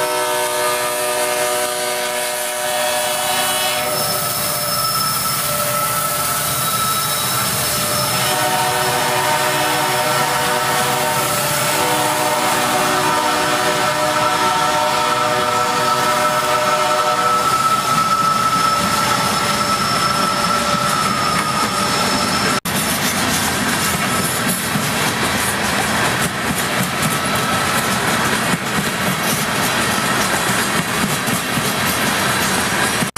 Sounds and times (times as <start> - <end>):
Train horn: 0.0 - 18.9
Railroad car, train wagon: 0.0 - 33.1.